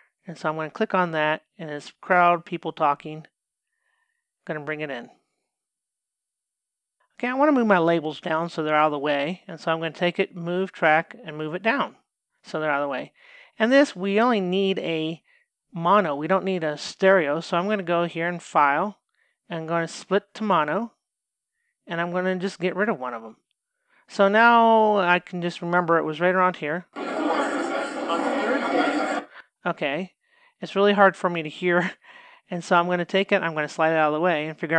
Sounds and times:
Speech: 0.3s - 3.3s, 4.5s - 5.2s, 7.2s - 15.2s, 15.8s - 21.0s, 21.9s - 23.4s, 24.1s - 34.7s.

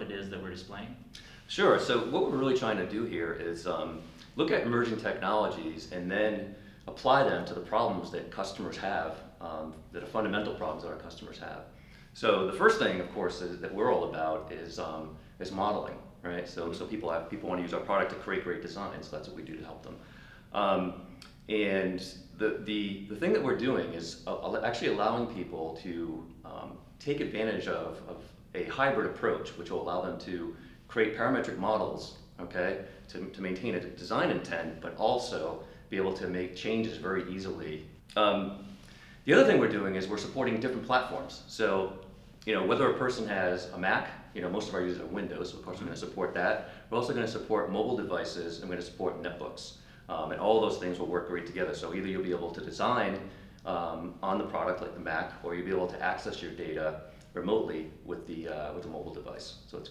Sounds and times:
Speech: 0.0s - 38.7s, 39.3s - 59.9s.

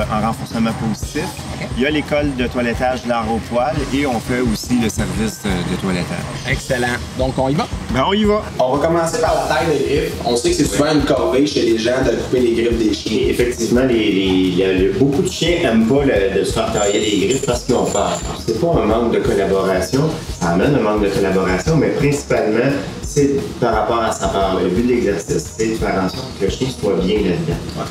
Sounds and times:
Music: 0.0s - 27.9s
Speech: 0.0s - 27.9s.

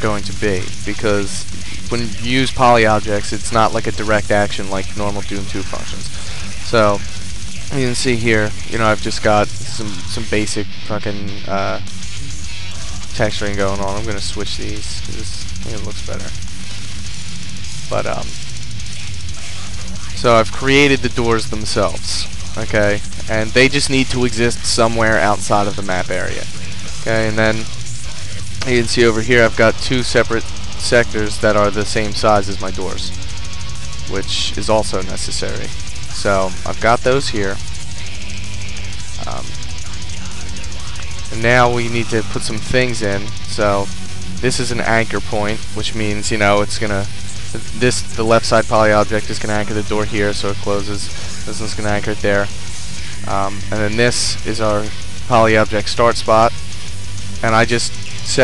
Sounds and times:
Speech: 0.0s - 11.8s, 12.7s - 16.4s, 17.9s - 18.3s, 19.4s - 33.2s, 34.1s - 37.6s, 39.2s - 52.5s, 53.2s - 56.6s, 57.4s - 58.4s
Music: 0.0s - 58.4s.

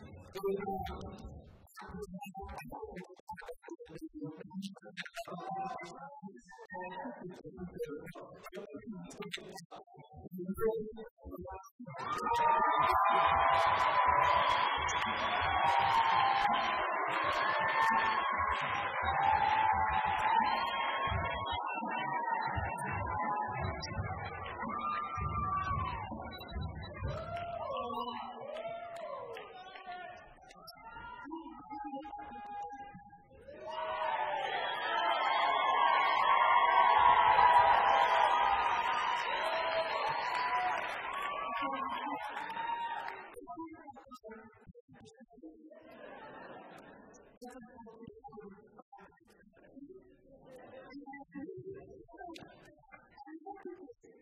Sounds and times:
Music: 0.0s - 54.2s
Speech: 0.0s - 54.2s.

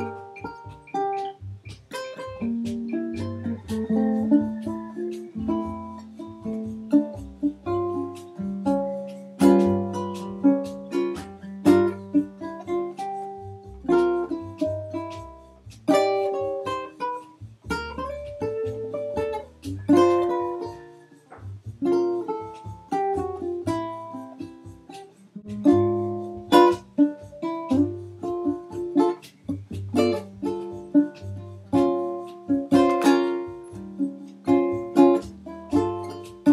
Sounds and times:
Ukulele: 0.0s - 36.5s.

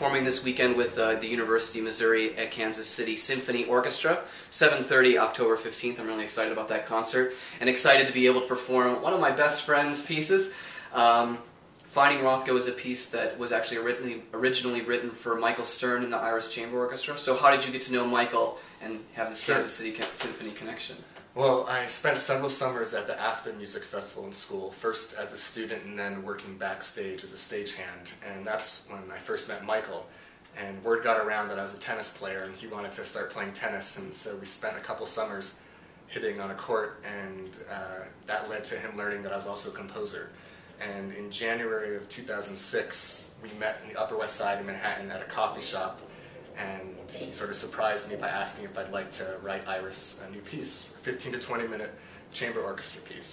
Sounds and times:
Speech: 0.0s - 53.3s.

